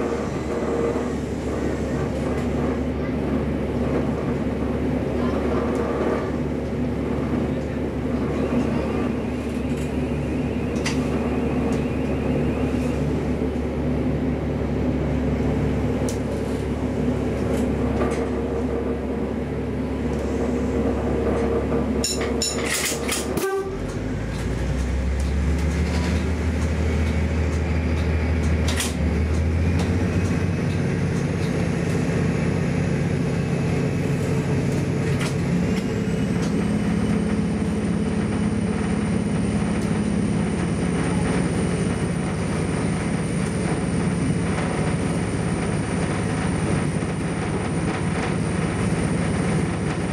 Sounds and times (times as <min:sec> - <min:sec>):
Train: 0:00.0 - 0:50.1.